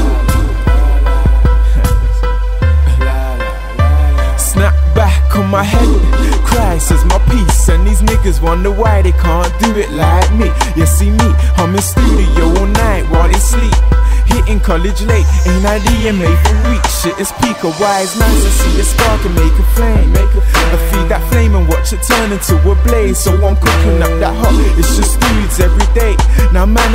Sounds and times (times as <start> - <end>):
Music: 0.0 - 26.9.